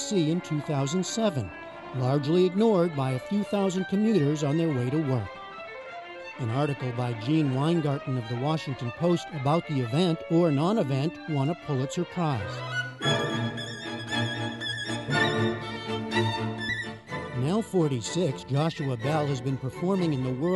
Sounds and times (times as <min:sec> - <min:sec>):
Speech: 0:00.0 - 0:05.3, 0:06.4 - 0:12.6, 0:17.4 - 0:20.5
Musical instrument: 0:00.0 - 0:20.5.